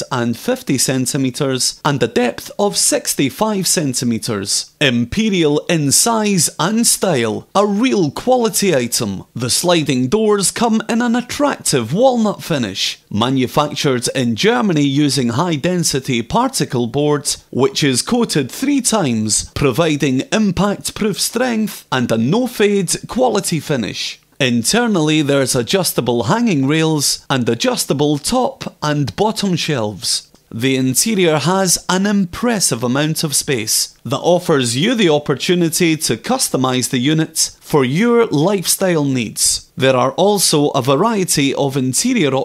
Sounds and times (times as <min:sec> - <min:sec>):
Speech: 0:00.0 - 0:42.4.